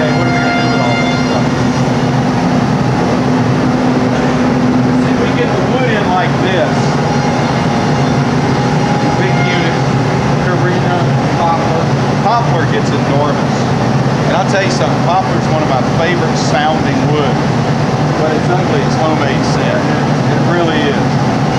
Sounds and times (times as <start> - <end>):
Speech: 0.0 - 2.0, 5.0 - 7.0, 9.0 - 17.4, 18.2 - 21.1.